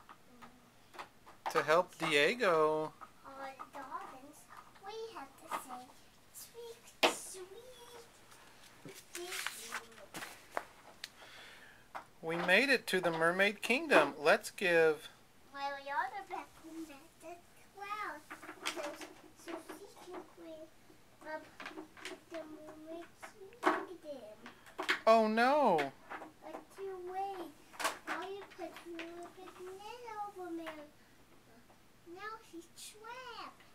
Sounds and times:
Inside, small room: 0:00.0 - 0:33.7.

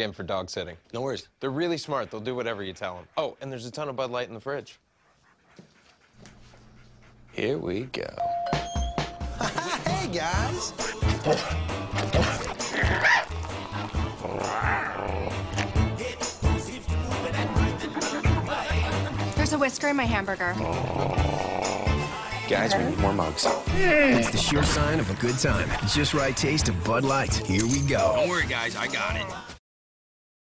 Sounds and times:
Music: 0:08.2 - 0:29.6.

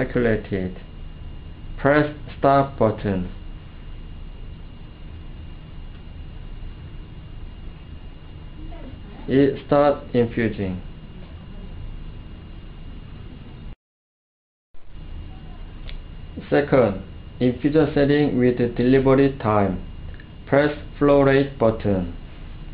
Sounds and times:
Speech: 0:00.0 - 0:00.9, 0:01.8 - 0:03.4, 0:08.6 - 0:11.6, 0:16.4 - 0:19.9, 0:20.5 - 0:22.2.

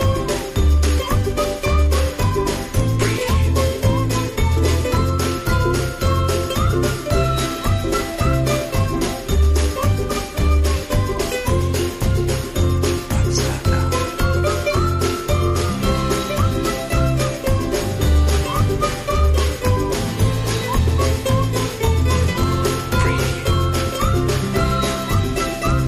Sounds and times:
Whistling: 0:00.0 - 0:12.4, 0:13.4 - 0:25.8.

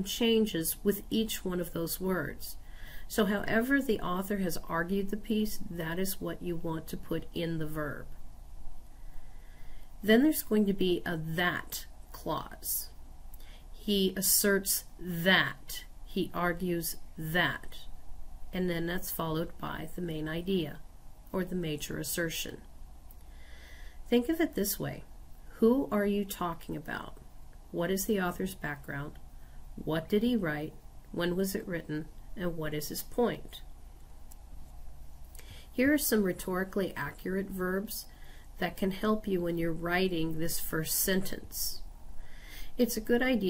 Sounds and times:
Speech: 0:00.0 - 0:08.2, 0:10.0 - 0:13.0, 0:13.8 - 0:17.9, 0:18.5 - 0:22.7, 0:24.1 - 0:29.2, 0:29.8 - 0:33.7, 0:35.8 - 0:41.9, 0:42.8 - 0:43.5.

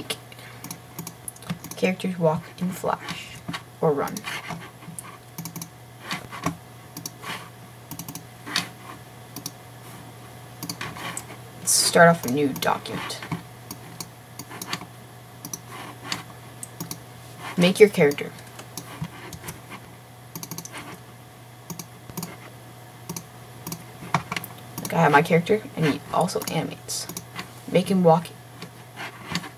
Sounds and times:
Speech: 0:01.8 - 0:04.2, 0:11.6 - 0:13.3, 0:17.6 - 0:18.4, 0:24.8 - 0:27.1, 0:27.7 - 0:28.4.

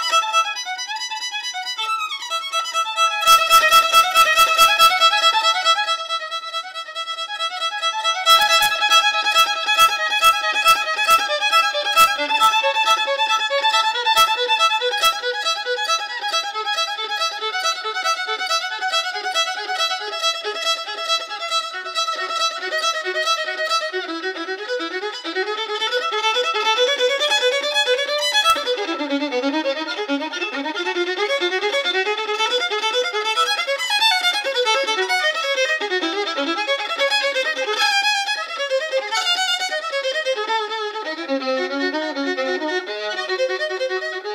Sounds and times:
Violin, fiddle: 0:00.0 - 0:44.3.

